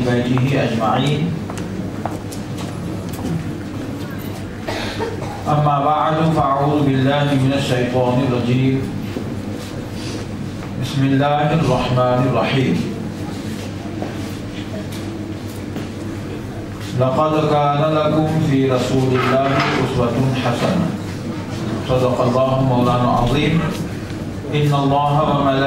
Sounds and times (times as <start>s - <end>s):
Male speech, man speaking: 0.0s - 1.4s, 5.5s - 8.9s, 10.8s - 13.0s, 17.0s - 21.0s, 21.8s - 23.8s, 24.5s - 25.6s
Narration, monologue: 0.0s - 1.6s, 4.7s - 13.2s, 16.8s - 25.6s.